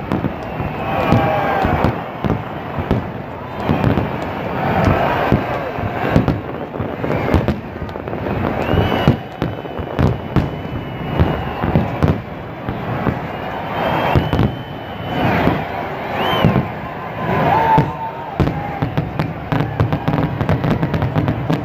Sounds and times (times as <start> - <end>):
Fireworks: 0.0 - 21.6.